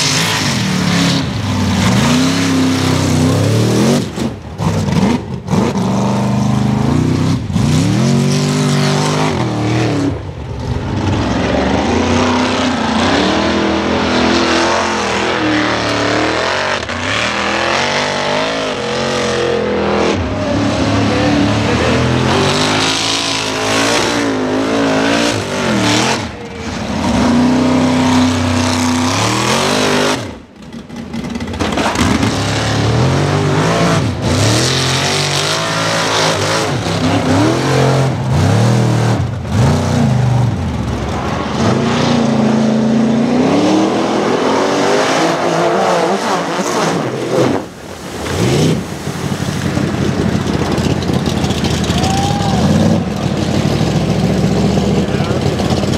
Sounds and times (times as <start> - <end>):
Outside, rural or natural: 0.0 - 55.9
Race car, auto racing: 0.0 - 55.9.